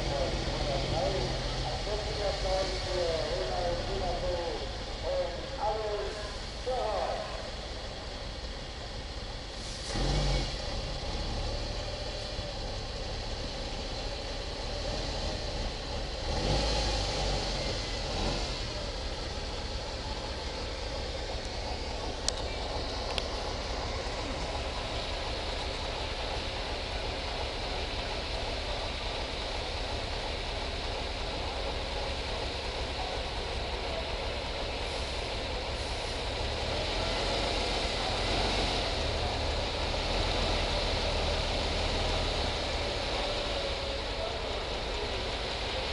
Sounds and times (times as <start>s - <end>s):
Speech: 0.0s - 7.6s, 32.8s - 34.7s, 42.8s - 45.9s
Vehicle: 0.0s - 45.9s.